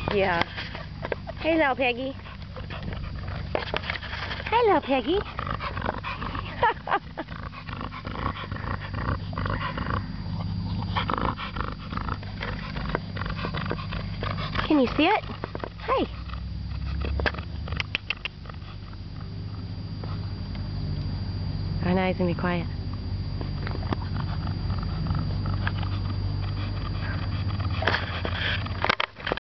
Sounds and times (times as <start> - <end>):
Speech: 0.1 - 0.5, 1.4 - 2.2, 4.5 - 5.3, 14.6 - 15.2, 15.8 - 16.1, 21.8 - 22.8.